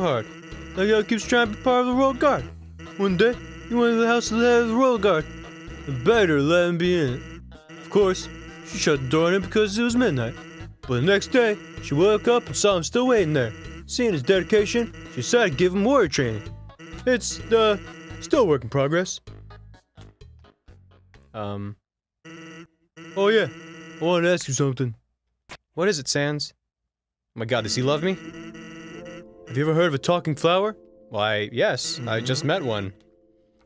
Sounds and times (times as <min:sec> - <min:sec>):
Speech: 0:00.8 - 0:02.4, 0:03.0 - 0:05.2, 0:05.9 - 0:07.2, 0:07.9 - 0:10.3, 0:10.9 - 0:16.5, 0:17.1 - 0:19.2, 0:21.4 - 0:21.8, 0:23.2 - 0:25.0, 0:25.8 - 0:26.6, 0:27.4 - 0:28.2, 0:29.5 - 0:33.0.